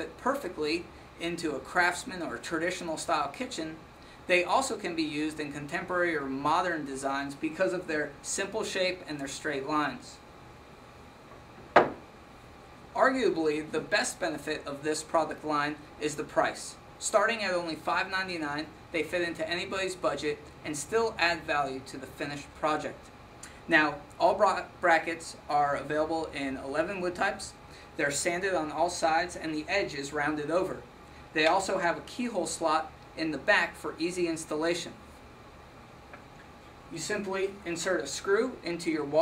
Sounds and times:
Speech: 0.0 - 10.2, 13.0 - 23.1, 23.7 - 35.0, 36.9 - 39.2.

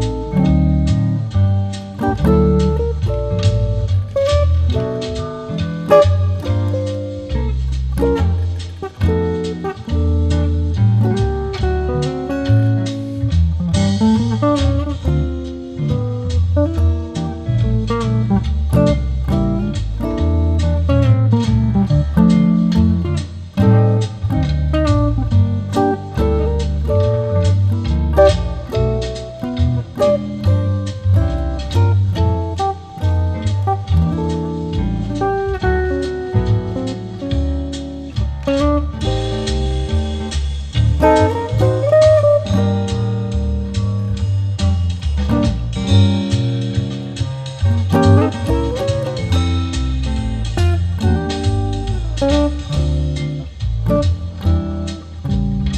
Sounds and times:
Acoustic guitar: 0.0 - 55.7.

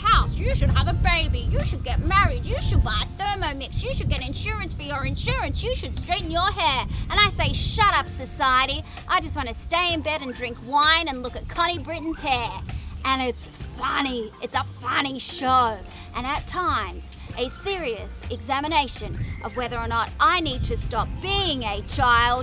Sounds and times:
Speech: 0.0 - 22.4.

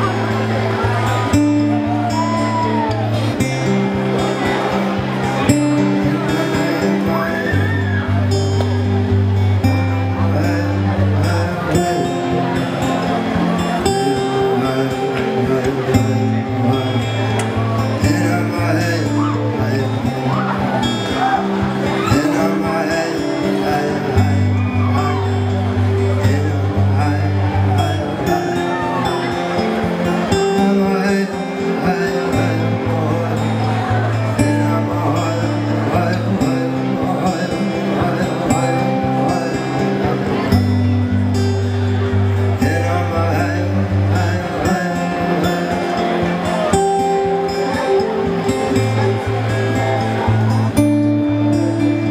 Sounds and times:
Music: 0.0 - 52.1
Speech: 3.3 - 50.8.

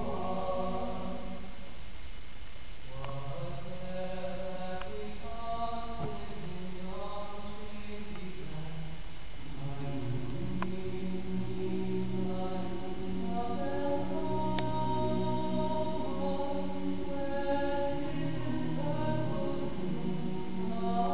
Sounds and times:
Male singing: 0.0 - 1.6, 2.9 - 21.1
Choir: 0.0 - 1.7, 2.9 - 21.1.

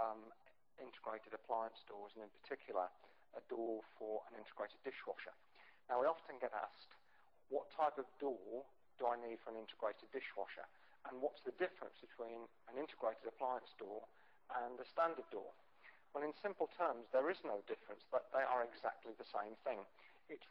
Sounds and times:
Speech: 0.0 - 20.5.

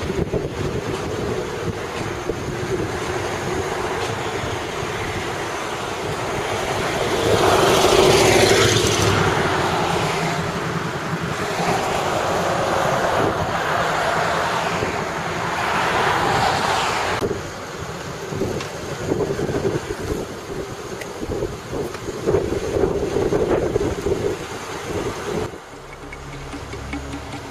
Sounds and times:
Traffic noise, roadway noise: 0.0 - 27.5.

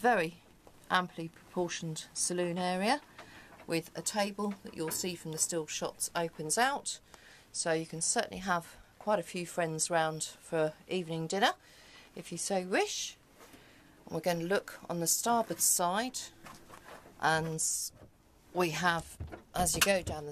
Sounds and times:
Speech: 0.0 - 3.1, 3.7 - 7.0, 7.6 - 11.6, 12.2 - 13.2, 14.1 - 16.4, 17.2 - 17.9, 18.5 - 20.3.

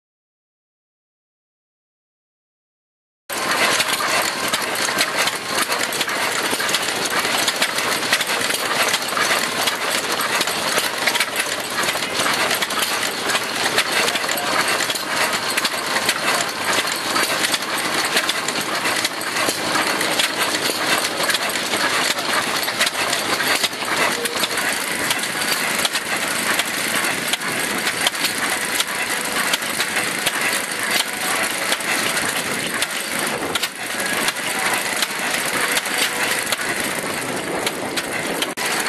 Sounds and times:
Engine: 3.3 - 38.8.

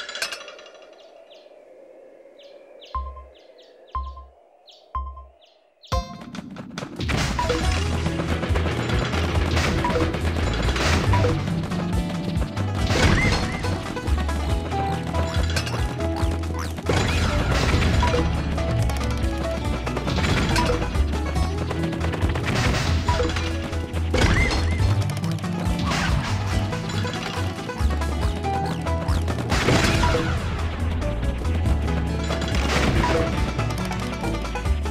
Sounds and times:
Music: 7.1 - 34.9.

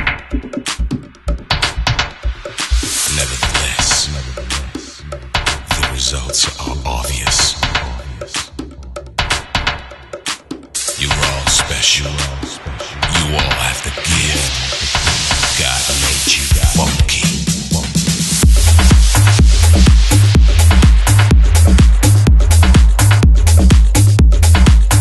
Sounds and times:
Electronic dance music: 0.0 - 25.0
House music: 0.0 - 25.0.

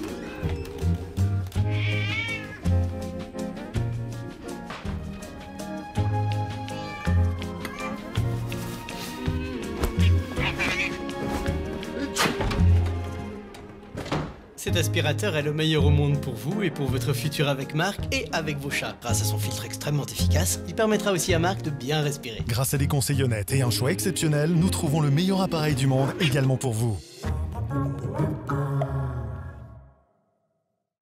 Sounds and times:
Music: 0.0 - 30.2
Speech: 14.6 - 27.1.

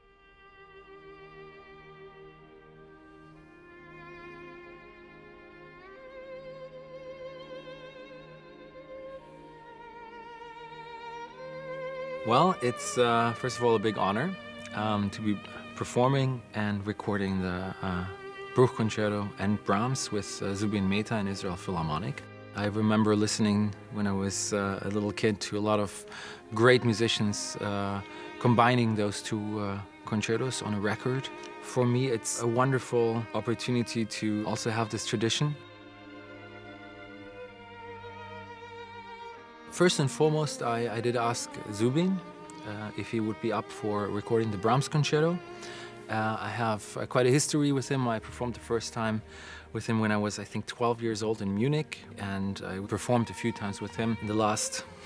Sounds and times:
Violin, fiddle: 0.0 - 55.0
Speech: 12.2 - 35.6, 39.7 - 45.4, 46.1 - 54.9.

